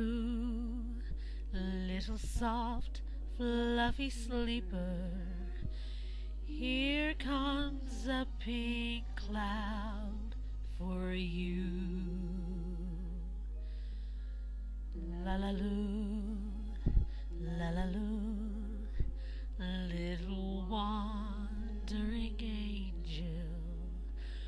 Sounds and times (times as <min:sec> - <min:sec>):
Lullaby: 0:00.0 - 0:24.4.